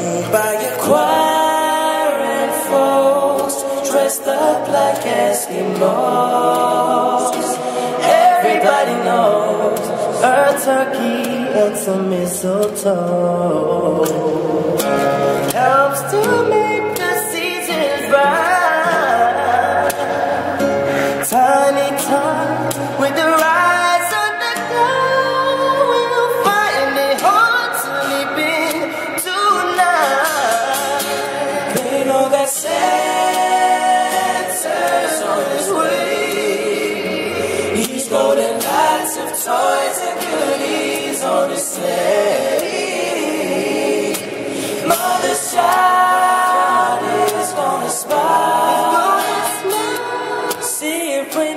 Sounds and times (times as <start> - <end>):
Music: 0.0 - 51.5.